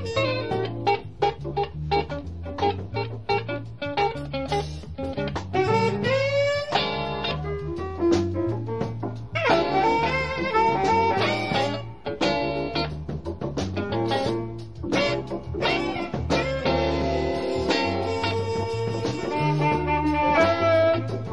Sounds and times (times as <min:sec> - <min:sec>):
Music: 0:00.0 - 0:21.3.